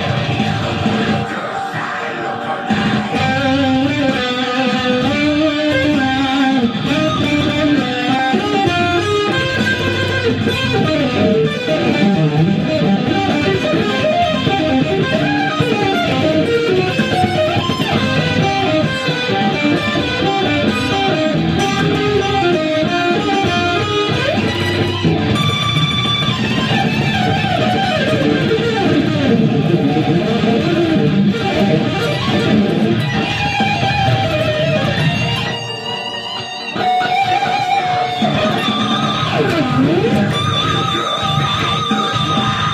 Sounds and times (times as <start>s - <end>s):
Electric guitar: 0.0s - 42.7s.